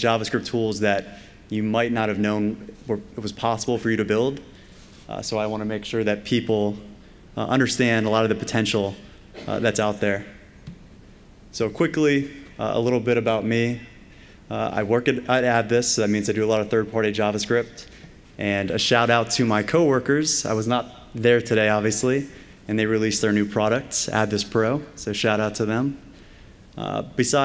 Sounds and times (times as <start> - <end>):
Speech: 0.0 - 4.5, 5.1 - 10.4, 11.5 - 26.0, 26.8 - 27.4.